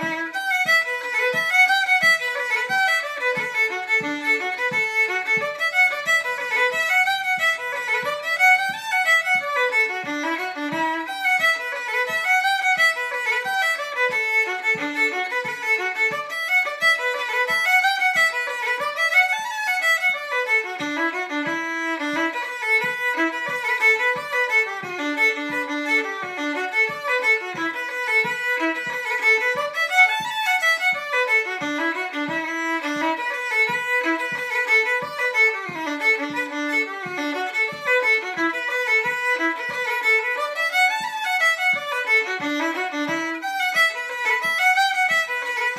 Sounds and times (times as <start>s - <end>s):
Violin, fiddle: 0.0s - 45.7s.